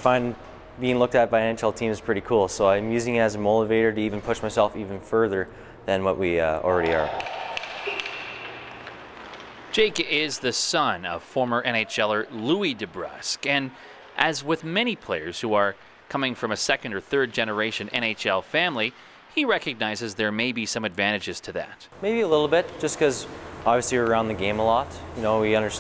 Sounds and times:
Speech: 0.0 - 7.2, 9.8 - 25.8.

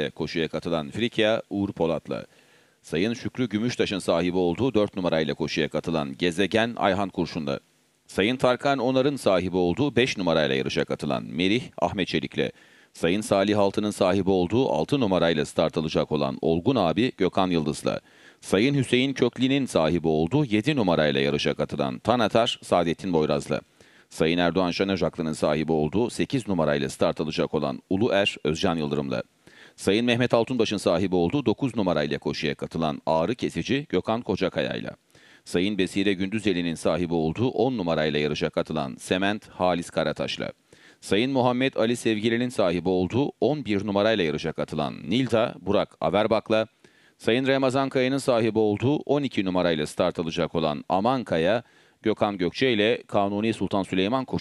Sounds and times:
Speech: 0.0 - 54.4.

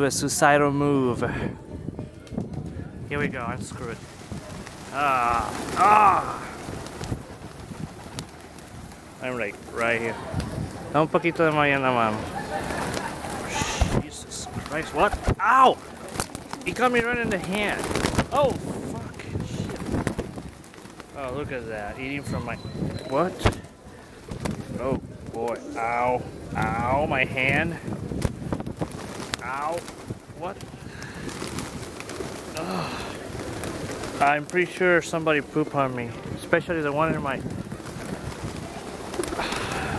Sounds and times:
Speech: 13.6 - 15.8, 24.7 - 27.8, 29.4 - 29.8, 34.2 - 37.4
Coo: 32.2 - 34.2, 38.6 - 39.9.

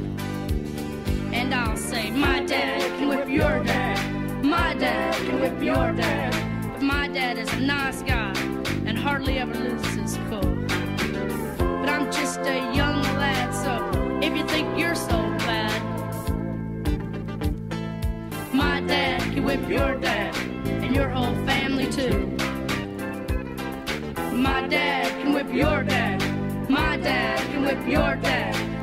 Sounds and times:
Music: 0.0 - 28.8.

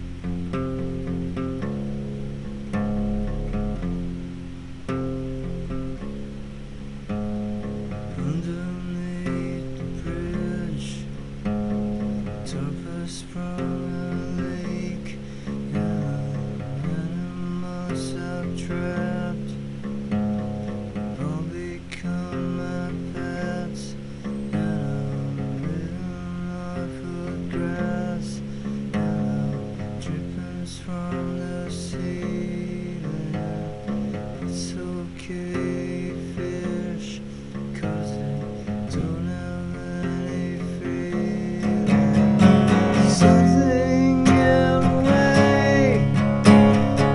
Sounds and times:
Acoustic guitar: 0.0 - 47.1.

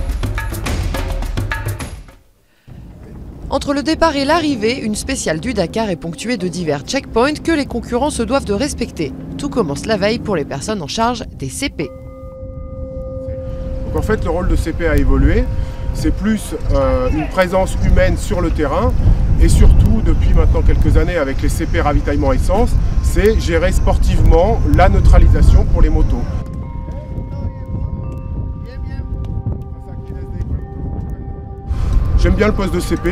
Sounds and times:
Speech: 3.0 - 11.9, 14.0 - 26.3, 32.2 - 33.1.

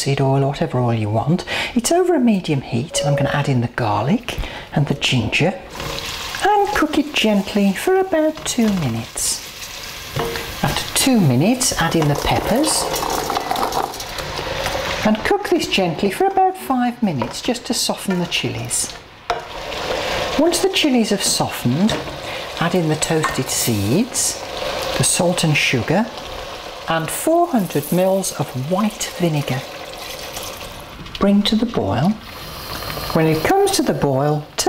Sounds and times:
Speech: 0.0 - 5.6, 6.4 - 9.4, 10.6 - 12.9, 15.0 - 19.0, 20.4 - 22.0, 22.6 - 24.4, 25.0 - 26.1, 26.9 - 29.7, 31.2 - 32.2, 33.2 - 34.6.

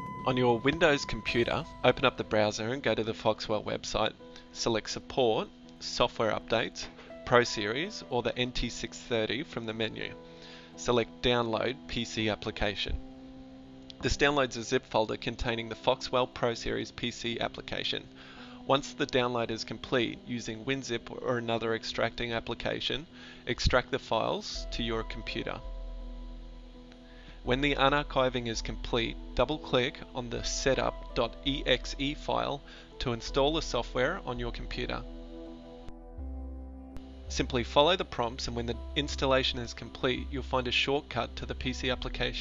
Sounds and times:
Music: 0.0 - 42.4
Speech: 0.3 - 10.2, 10.8 - 13.0, 14.0 - 18.1, 18.7 - 25.6, 27.5 - 35.1, 37.3 - 42.4.

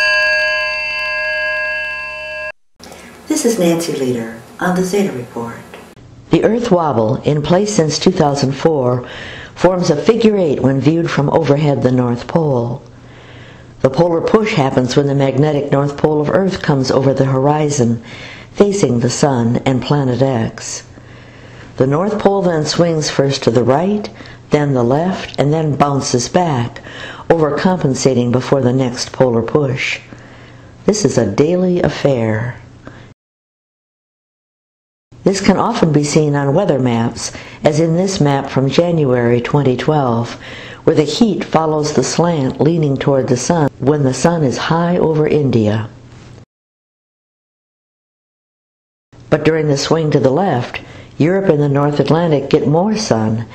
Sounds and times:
Speech: 3.3 - 9.0, 9.6 - 12.9, 13.8 - 18.0, 18.6 - 20.9, 21.8 - 30.0, 30.9 - 32.6, 35.2 - 46.0, 49.3 - 53.5.

